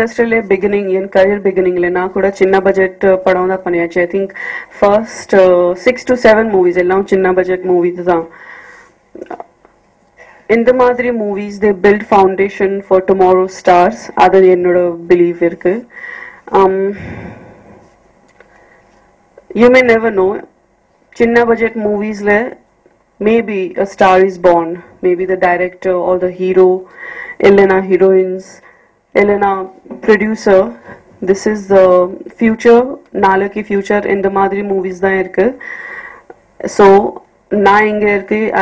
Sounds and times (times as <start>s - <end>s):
Female speech, woman speaking: 0.0s - 8.3s, 10.5s - 15.9s, 16.5s - 17.0s, 19.5s - 20.5s, 21.2s - 22.6s, 23.2s - 26.8s, 27.4s - 28.6s, 29.2s - 35.6s, 36.6s - 38.6s
Narration, monologue: 0.0s - 38.6s.